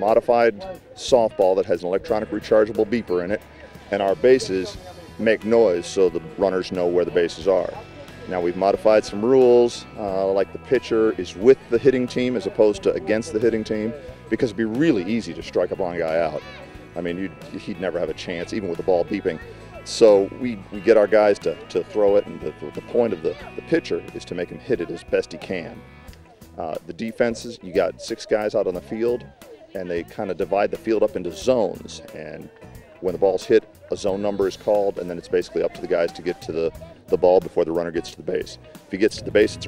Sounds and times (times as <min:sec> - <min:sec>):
Speech: 0:00.0 - 0:25.8, 0:26.6 - 0:39.6
Music: 0:00.0 - 0:39.6.